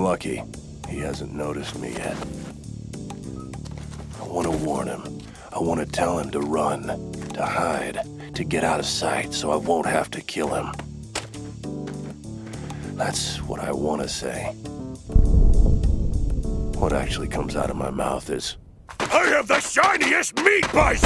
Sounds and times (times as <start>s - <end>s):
Speech: 0.0s - 2.3s, 4.2s - 10.8s, 13.0s - 14.6s, 16.8s - 21.0s
Music: 0.0s - 18.2s, 20.6s - 21.0s.